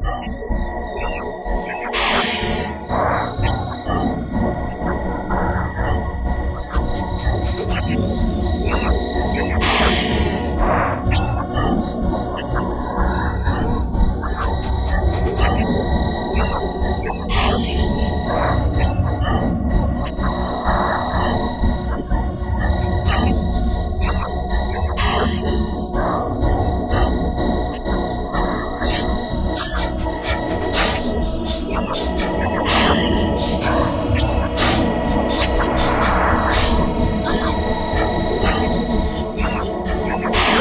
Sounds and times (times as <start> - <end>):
Techno: 0.0 - 40.6.